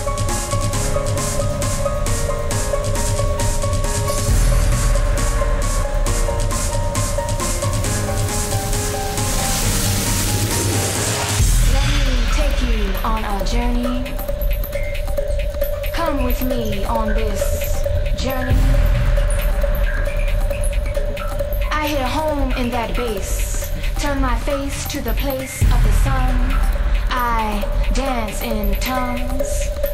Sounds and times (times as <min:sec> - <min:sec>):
Music: 0:00.0 - 0:29.9
Speech: 0:11.6 - 0:14.2, 0:16.0 - 0:18.9, 0:21.7 - 0:29.7.